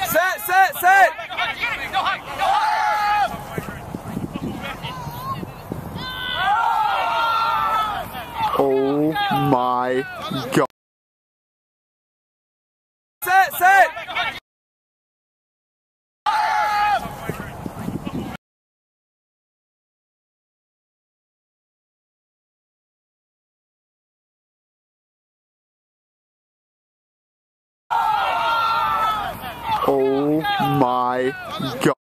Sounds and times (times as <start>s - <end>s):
Speech: 8.2s - 10.7s, 13.2s - 14.4s, 29.4s - 32.0s.